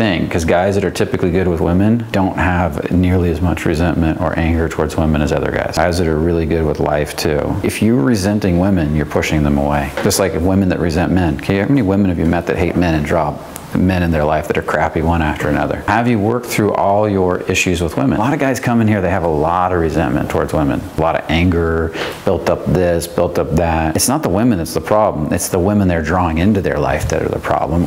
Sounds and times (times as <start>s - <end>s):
Speech: 0.0s - 27.8s.